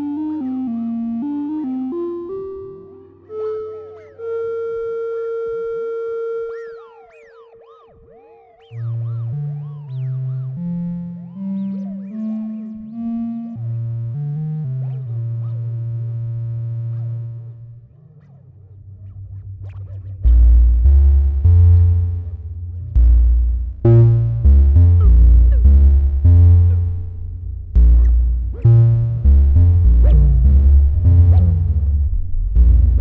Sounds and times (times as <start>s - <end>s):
Synthesizer: 0.0s - 33.0s.